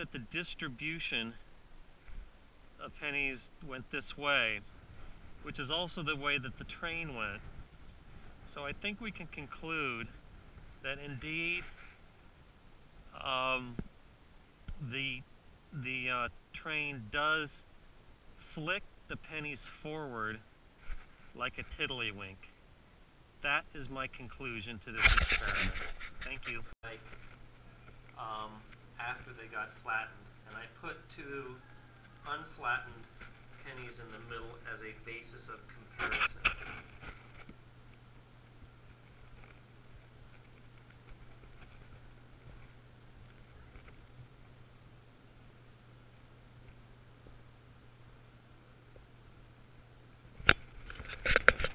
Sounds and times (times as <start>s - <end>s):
Speech: 0.0s - 1.4s, 2.8s - 4.6s, 5.4s - 7.4s, 8.5s - 10.1s, 10.9s - 11.7s, 13.2s - 13.8s, 14.8s - 15.2s, 15.8s - 17.7s, 18.4s - 20.4s, 21.4s - 22.5s, 23.4s - 27.0s, 28.2s - 31.6s, 32.3s - 36.6s.